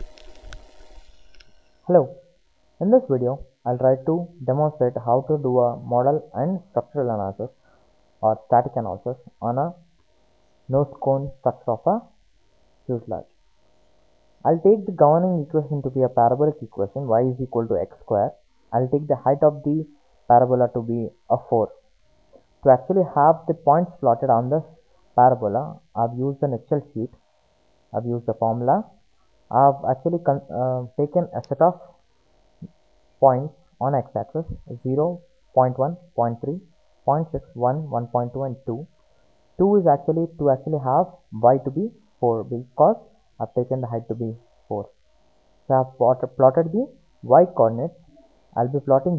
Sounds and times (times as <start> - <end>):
Speech: 1.9 - 2.1, 2.8 - 7.5, 8.2 - 9.8, 10.7 - 12.1, 12.9 - 13.2, 14.5 - 21.8, 22.7 - 27.2, 28.0 - 28.9, 29.5 - 31.9, 33.2 - 38.9, 39.6 - 44.9, 45.7 - 48.0, 48.6 - 49.1.